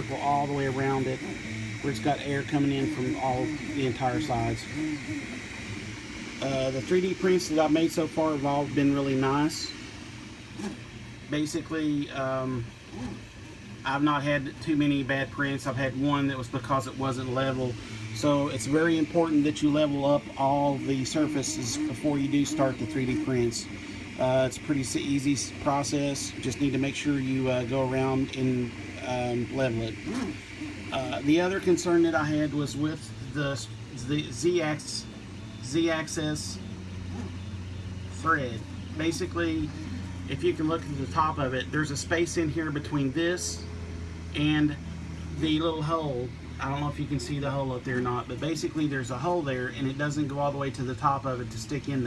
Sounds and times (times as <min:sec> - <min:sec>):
Speech: 0:00.0 - 0:05.1, 0:06.4 - 0:09.8, 0:11.3 - 0:12.8, 0:13.8 - 0:30.1, 0:30.9 - 0:36.7, 0:38.1 - 0:43.7, 0:44.4 - 0:52.0.